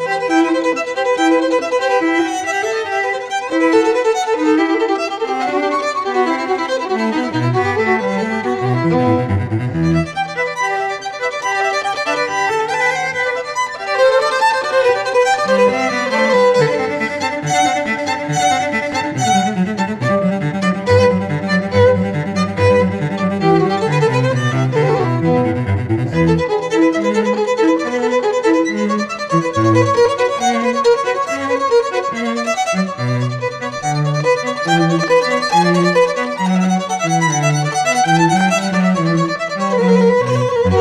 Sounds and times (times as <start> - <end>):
Violin, fiddle: 0.0 - 40.8.